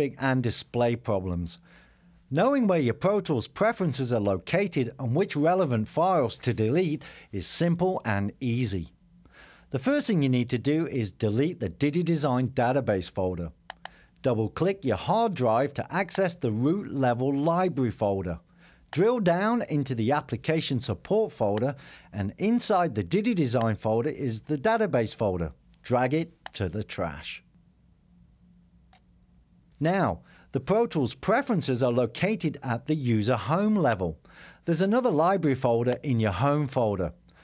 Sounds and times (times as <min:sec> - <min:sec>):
Speech: 0:00.0 - 0:01.6, 0:02.3 - 0:09.0, 0:09.7 - 0:13.6, 0:14.2 - 0:18.4, 0:19.0 - 0:27.5, 0:29.8 - 0:37.2.